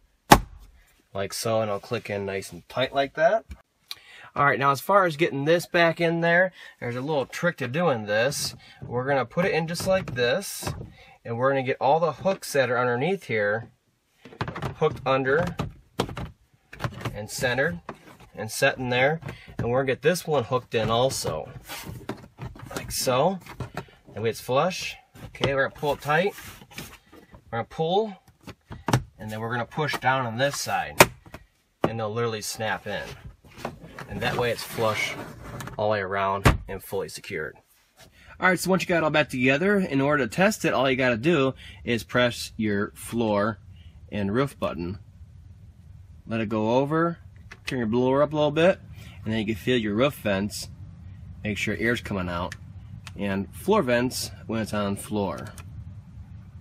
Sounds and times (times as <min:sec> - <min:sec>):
Speech: 0:01.2 - 0:03.5, 0:04.4 - 0:13.7, 0:17.1 - 0:17.8, 0:18.4 - 0:21.5, 0:22.7 - 0:23.4, 0:24.2 - 0:26.4, 0:27.6 - 0:28.2, 0:29.2 - 0:31.0, 0:31.8 - 0:33.2, 0:34.1 - 0:35.2, 0:35.8 - 0:37.6, 0:38.4 - 0:45.0, 0:46.3 - 0:50.7, 0:51.4 - 0:52.6, 0:53.2 - 0:55.6.